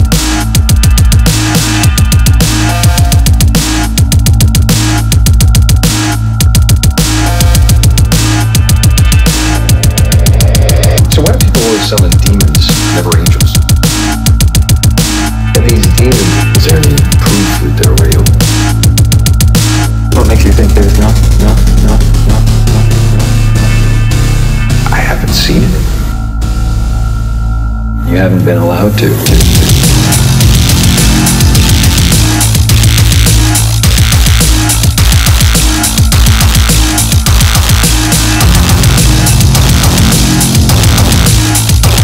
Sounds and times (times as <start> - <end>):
Music: 0.0 - 42.0
Speech: 11.0 - 13.6, 15.6 - 18.4, 20.2 - 22.5, 24.9 - 26.0, 28.0 - 29.7.